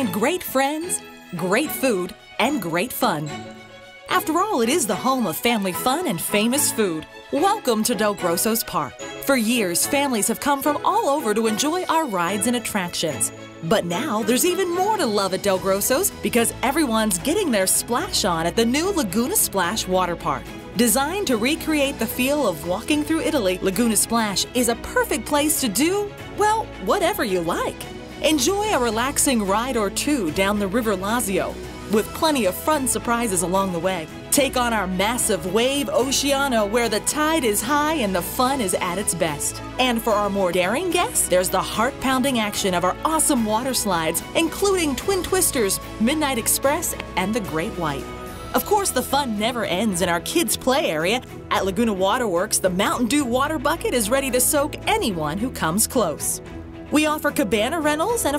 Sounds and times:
Speech: 0.0 - 3.4, 4.1 - 58.3
Music: 0.0 - 58.3.

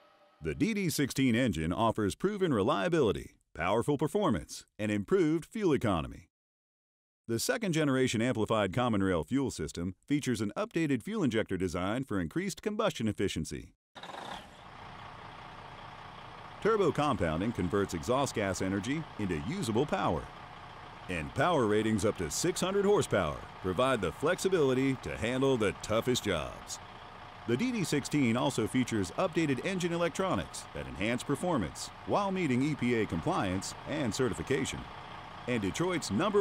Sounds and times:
Speech: 0.4 - 6.3, 7.3 - 13.7, 16.6 - 20.3, 21.1 - 26.8, 27.5 - 34.9, 35.5 - 36.4
Heavy engine (low frequency): 14.0 - 36.4.

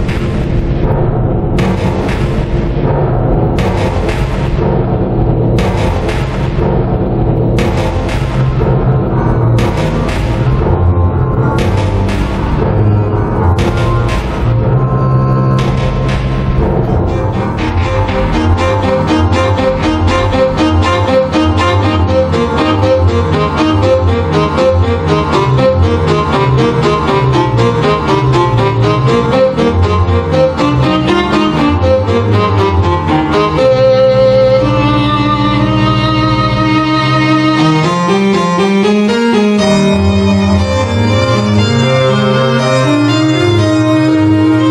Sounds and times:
Classical music: 0.0 - 44.7.

